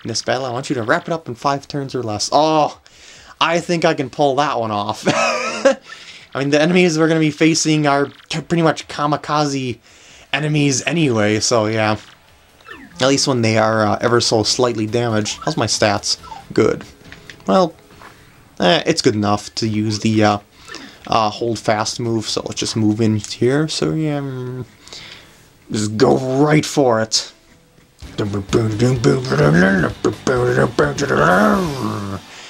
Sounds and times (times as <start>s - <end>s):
Speech: 0.0s - 2.8s, 3.4s - 5.2s, 6.4s - 12.1s, 12.9s - 16.9s, 17.5s - 17.8s, 18.6s - 20.4s, 21.1s - 24.7s, 25.7s - 27.4s, 28.0s - 32.3s.